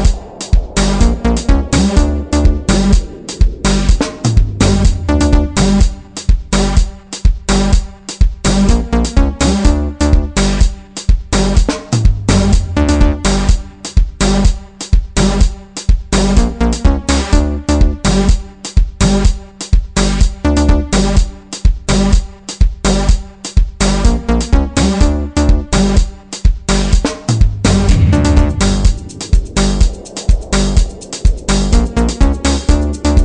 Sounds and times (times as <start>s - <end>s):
Music: 0.0s - 33.2s.